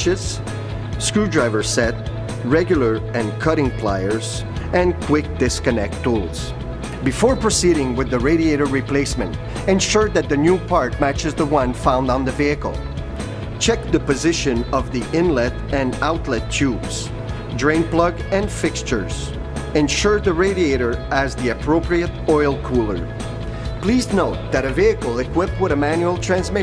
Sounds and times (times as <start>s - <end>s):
Speech: 0.0s - 0.4s, 1.0s - 12.8s, 13.6s - 23.0s, 23.8s - 26.6s
Music: 0.0s - 26.6s.